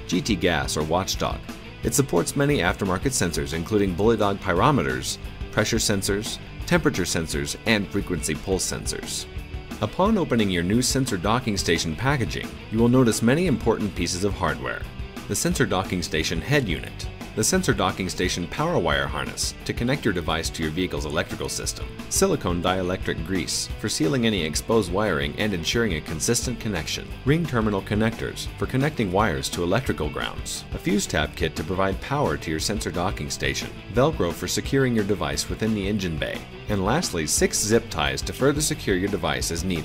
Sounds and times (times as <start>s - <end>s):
Music: 0.0s - 39.8s
Speech: 0.0s - 39.8s.